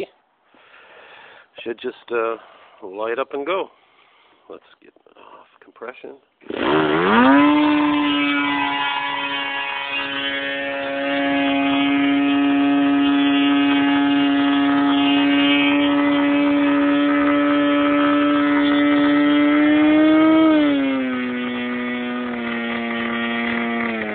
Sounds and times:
Speech: 0:01.6 - 0:03.7, 0:04.5 - 0:06.2.

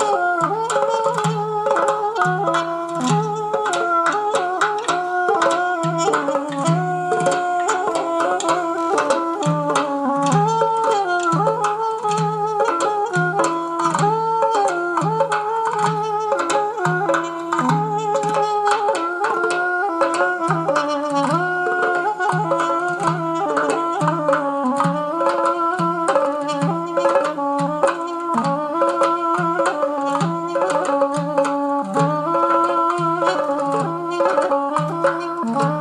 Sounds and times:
Middle Eastern music: 0:00.0 - 0:35.8.

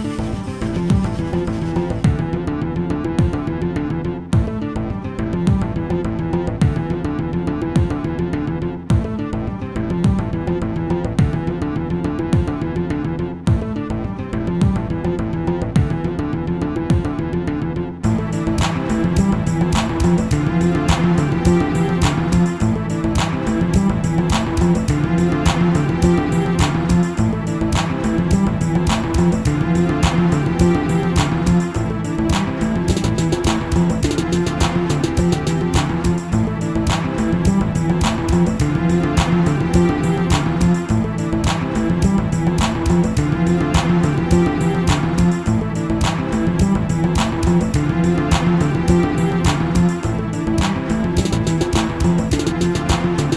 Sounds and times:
Music: 0:00.0 - 0:53.3.

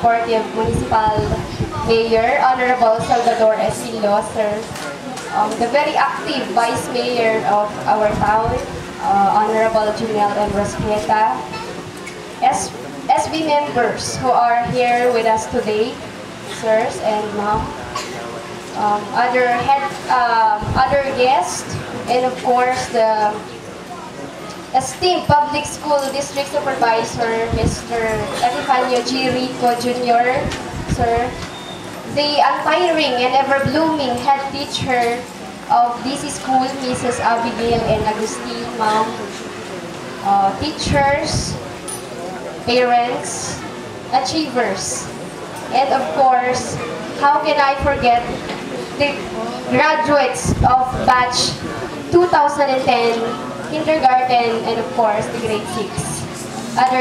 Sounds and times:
Female speech, woman speaking: 0:00.0 - 0:11.6, 0:12.4 - 0:17.8, 0:18.8 - 0:23.5, 0:24.7 - 0:31.4, 0:32.1 - 0:39.3, 0:40.2 - 0:41.6, 0:42.7 - 0:57.0.

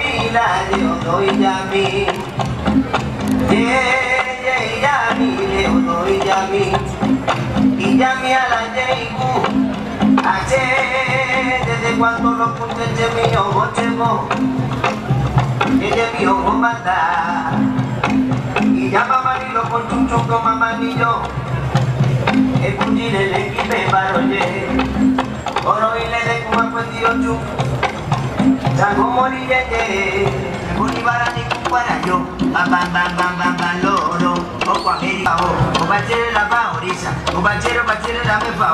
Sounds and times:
Male singing: 0:00.0 - 0:02.4, 0:03.5 - 0:14.6, 0:15.6 - 0:21.4, 0:22.3 - 0:27.6, 0:28.6 - 0:38.7
Music: 0:00.0 - 0:38.7.

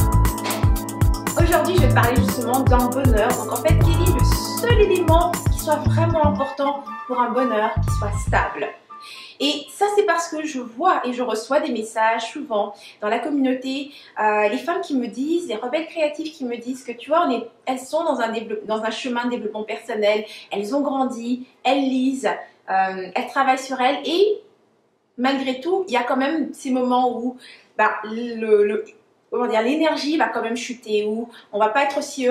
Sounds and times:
Speech: 0:01.4 - 0:08.8, 0:09.4 - 0:24.5, 0:25.2 - 0:32.3.

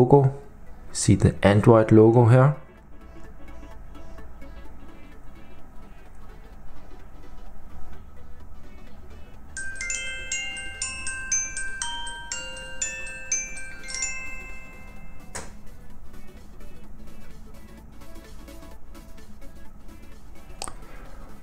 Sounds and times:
Marimba, xylophone: 0:09.6 - 0:15.7
Glockenspiel: 0:09.6 - 0:15.8.

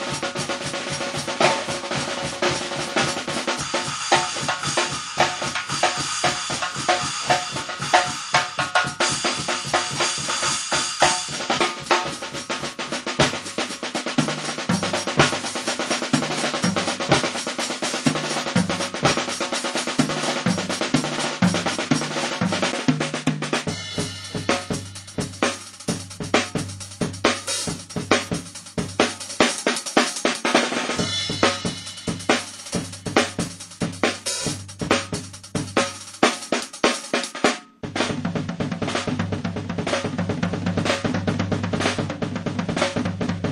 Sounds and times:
Hi-hat: 0:00.0 - 0:22.4, 0:23.7 - 0:37.4.

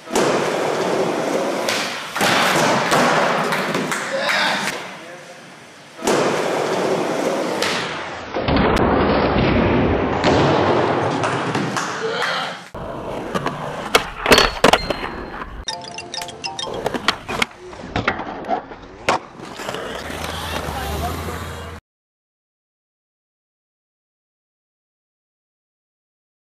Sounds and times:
Skateboard: 0:00.0 - 0:04.8, 0:06.0 - 0:15.6, 0:16.7 - 0:21.3
Speech: 0:20.2 - 0:21.8.

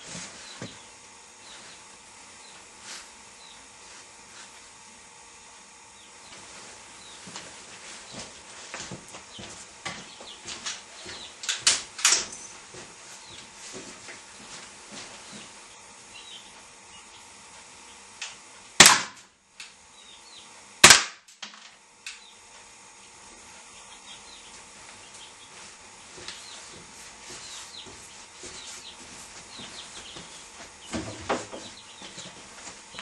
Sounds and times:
Cap gun: 0:18.8 - 0:19.2, 0:20.8 - 0:21.3.

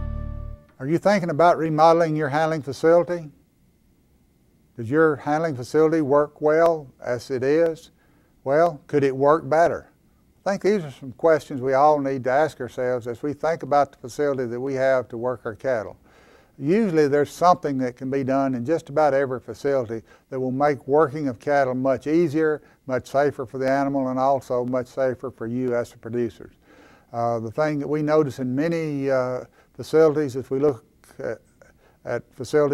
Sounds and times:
Speech: 0:00.8 - 0:03.4, 0:04.8 - 0:16.0, 0:16.6 - 0:32.7.

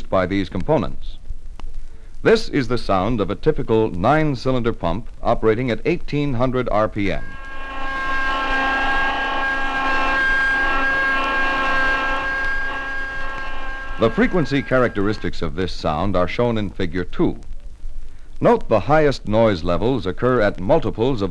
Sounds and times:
Speech: 0:00.0 - 0:01.2, 0:02.2 - 0:07.2, 0:14.0 - 0:17.5, 0:18.4 - 0:21.3
Rustle: 0:00.0 - 0:07.2, 0:15.2 - 0:21.3.

